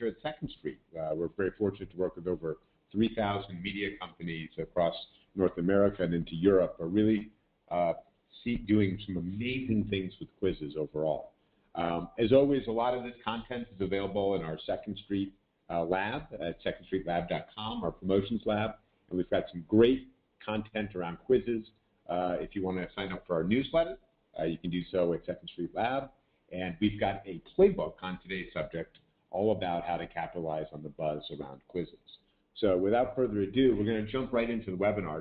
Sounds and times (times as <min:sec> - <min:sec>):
Speech: 0:00.0 - 0:35.2.